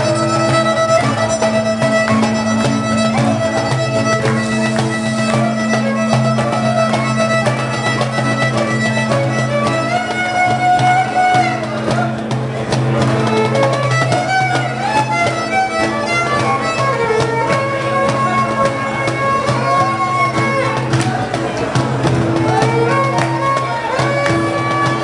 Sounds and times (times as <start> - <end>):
Violin, fiddle: 0.0 - 25.0.